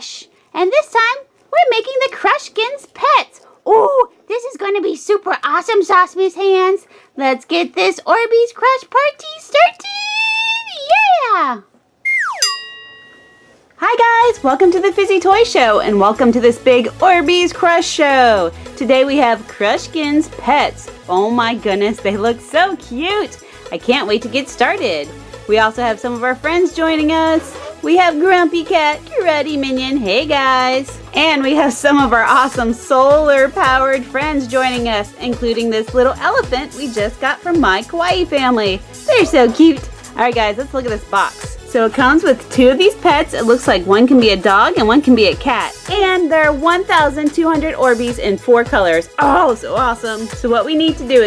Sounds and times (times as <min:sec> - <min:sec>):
Speech: 0:00.0 - 0:11.7, 0:13.8 - 0:51.2.